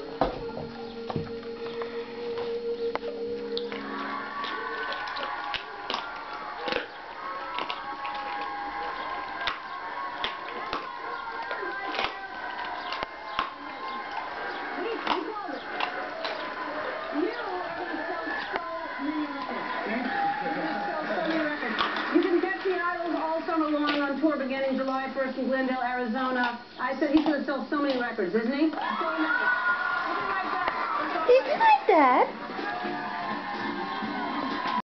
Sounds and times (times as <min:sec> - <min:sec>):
Music: 0:00.0 - 0:25.3, 0:29.0 - 0:34.8.